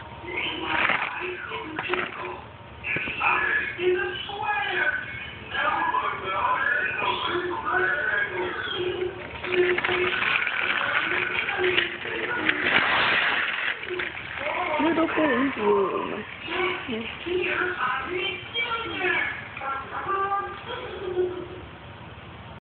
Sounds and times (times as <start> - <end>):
Speech: 3.0 - 12.8, 13.9 - 21.7.